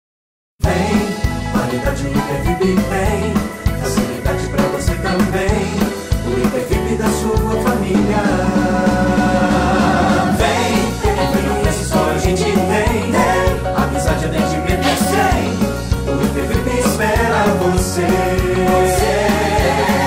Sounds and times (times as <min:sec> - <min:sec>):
Jingle (music): 0:00.6 - 0:20.0.